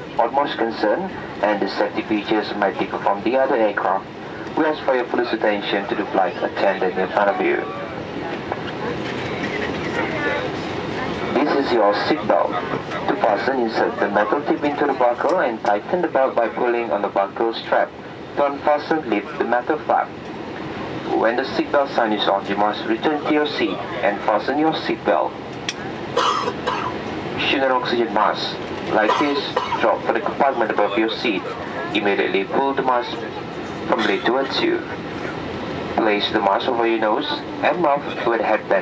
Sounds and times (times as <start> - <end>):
Vehicle: 0.0 - 38.8
Speech: 0.2 - 8.8, 9.7 - 20.1, 21.1 - 25.3, 27.4 - 35.0, 36.0 - 38.8.